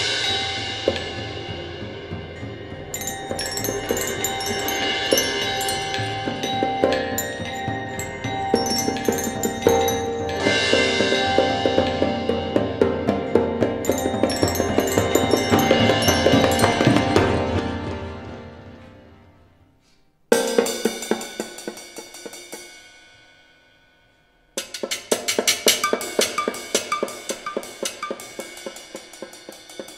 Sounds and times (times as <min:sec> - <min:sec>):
Drum: 0:00.0 - 0:18.7, 0:24.6 - 0:29.9.